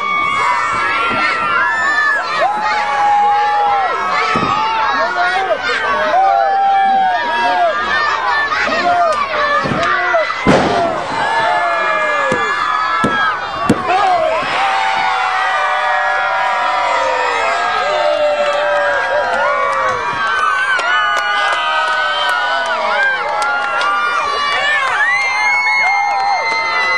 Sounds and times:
Speech: 0:00.7 - 0:10.5.

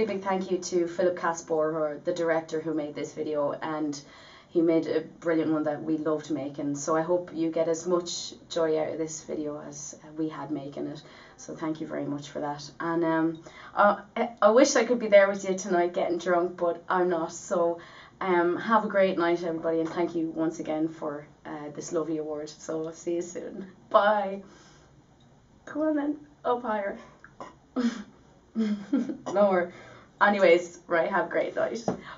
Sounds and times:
Female speech, woman speaking: 0:00.0 - 0:24.5, 0:25.7 - 0:27.1, 0:29.3 - 0:32.0
Narration, monologue: 0:00.0 - 0:32.1.

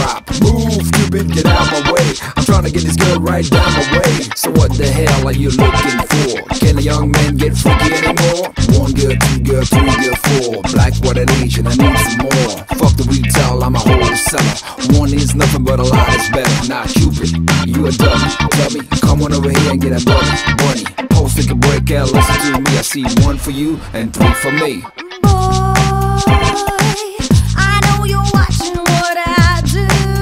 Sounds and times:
Music: 0:00.0 - 0:30.2.

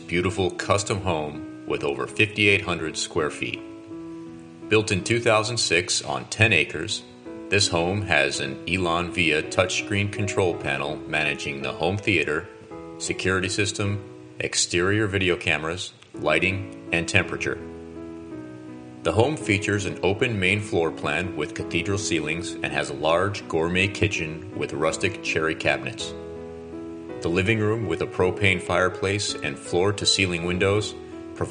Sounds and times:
Speech: 0:00.0 - 0:03.7, 0:04.7 - 0:17.6, 0:19.1 - 0:26.2, 0:27.2 - 0:31.5
Music: 0:00.0 - 0:31.5.

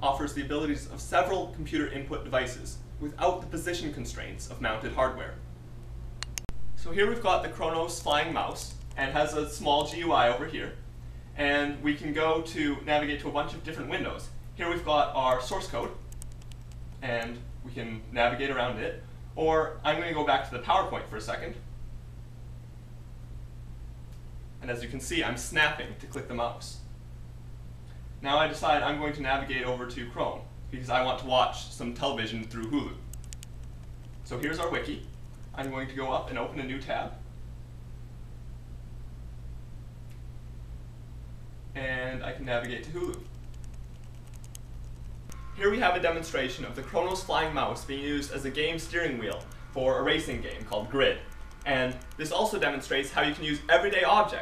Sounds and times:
Speech: 0:00.0 - 0:05.4, 0:06.8 - 0:10.8, 0:11.4 - 0:16.0, 0:17.0 - 0:21.7, 0:24.6 - 0:26.9, 0:28.2 - 0:33.1, 0:34.3 - 0:37.2, 0:41.8 - 0:43.3, 0:45.6 - 0:54.4.

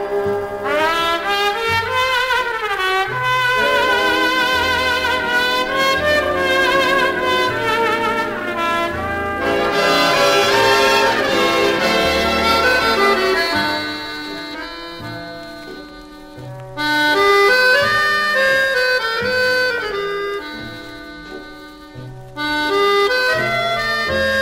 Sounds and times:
Jazz: 0:00.0 - 0:24.4
Trombone: 0:00.0 - 0:24.4.

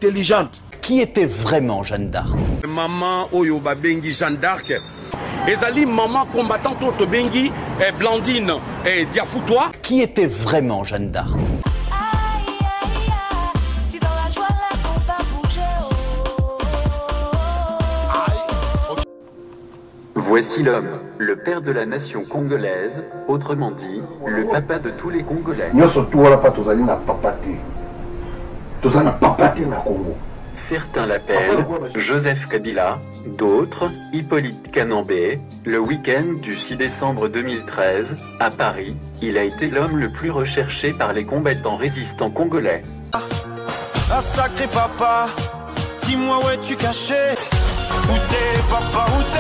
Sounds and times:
Speech: 0:00.0 - 0:04.8, 0:05.4 - 0:11.4, 0:20.2 - 0:27.6, 0:28.8 - 0:42.9
Music: 0:11.6 - 0:29.8, 0:30.4 - 0:49.4.

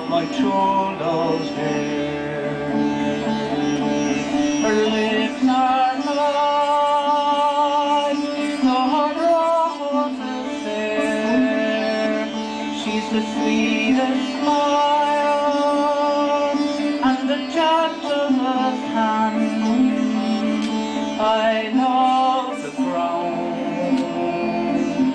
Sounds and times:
Chant: 0:00.0 - 0:25.1
Sitar: 0:00.0 - 0:25.1.

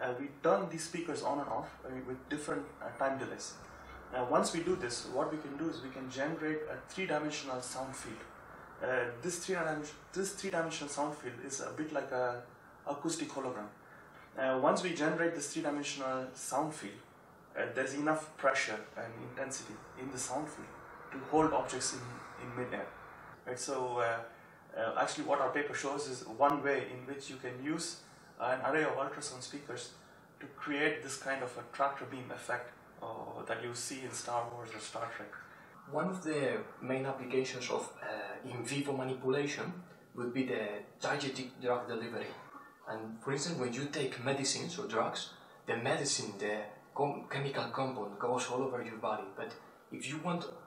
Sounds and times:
Speech: 0:00.0 - 0:50.6.

